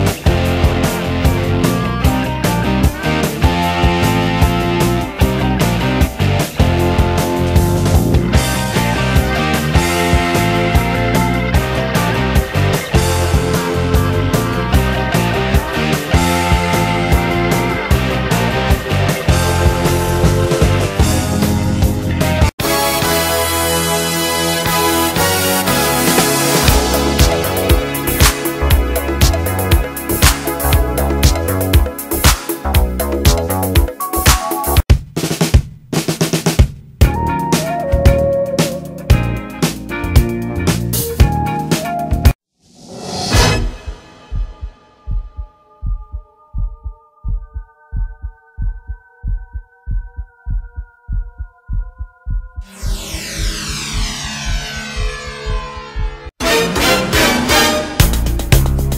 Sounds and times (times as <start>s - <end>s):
Music: 0.0s - 58.9s.